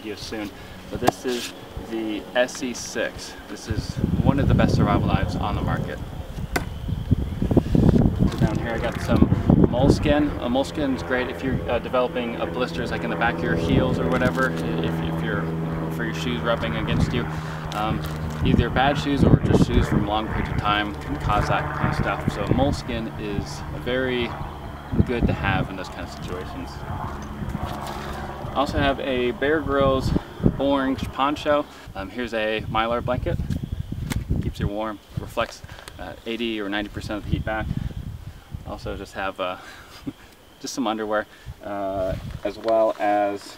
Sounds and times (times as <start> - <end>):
Speech: 0.0 - 6.0, 8.3 - 24.4, 25.0 - 26.8, 28.6 - 33.4, 34.4 - 37.7, 38.7 - 39.6, 40.6 - 43.5
Outside, rural or natural: 0.0 - 43.5.